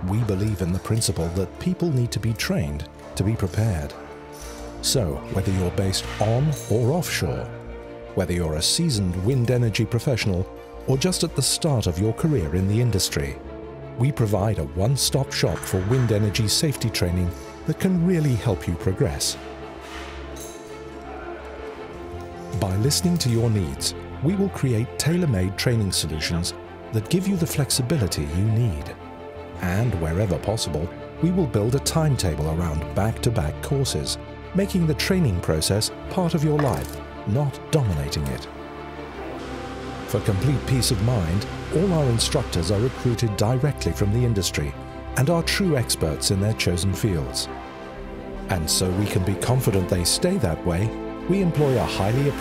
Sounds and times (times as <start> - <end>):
Speech: 0.0 - 4.0, 4.8 - 7.5, 8.2 - 13.4, 14.0 - 19.4, 22.5 - 29.0, 29.6 - 38.5, 40.1 - 47.5, 48.5 - 52.4
Music: 0.0 - 52.4.